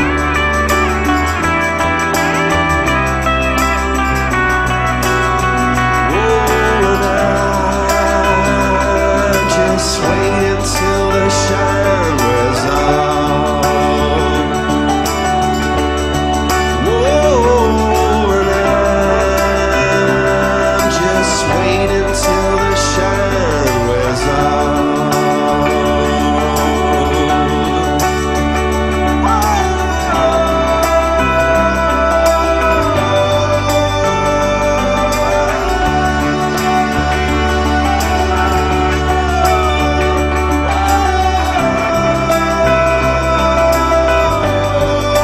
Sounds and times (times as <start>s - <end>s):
Music: 0.0s - 45.2s
Singing: 0.0s - 45.2s.